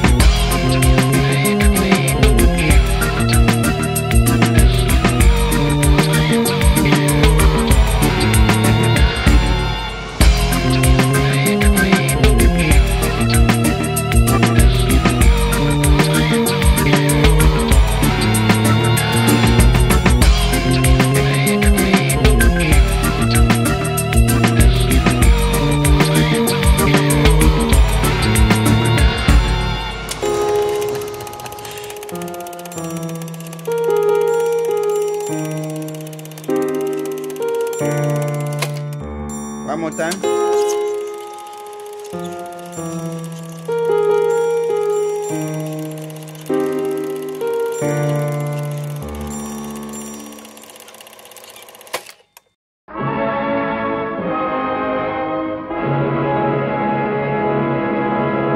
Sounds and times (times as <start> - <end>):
Music: 0.0 - 51.9, 52.9 - 58.5.